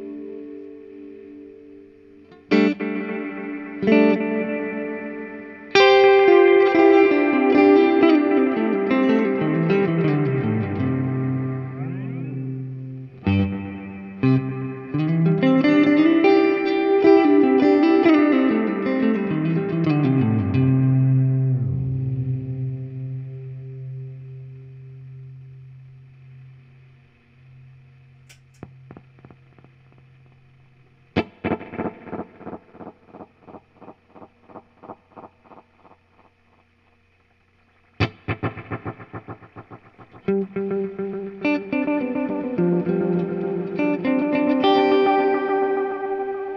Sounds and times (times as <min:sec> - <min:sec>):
Distortion: 0:00.0 - 0:46.5
Effects unit: 0:00.0 - 0:46.5
Electric guitar: 0:00.0 - 0:46.5.